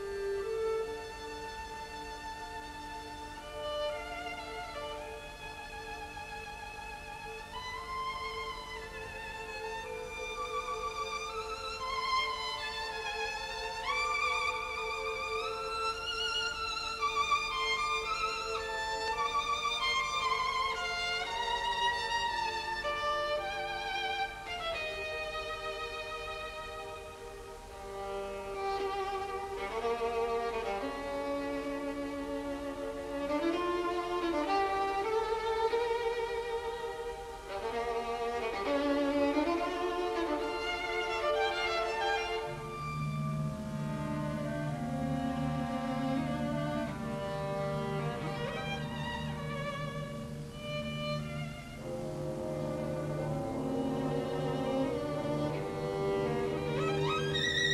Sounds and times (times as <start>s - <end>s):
Violin, fiddle: 0.0s - 57.7s.